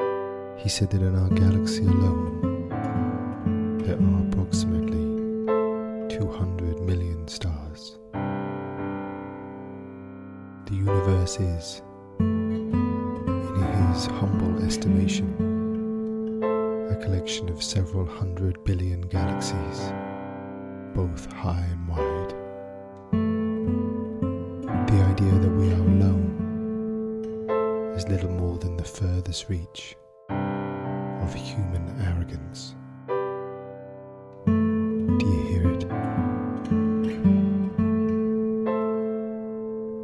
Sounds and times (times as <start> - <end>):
Music: 0.0 - 40.0
Speech: 0.6 - 2.4, 3.8 - 5.2, 6.1 - 8.0, 10.7 - 11.8, 13.4 - 15.4, 16.9 - 20.0, 21.0 - 22.4, 24.9 - 26.4, 27.9 - 30.0, 31.2 - 32.8, 35.2 - 36.0.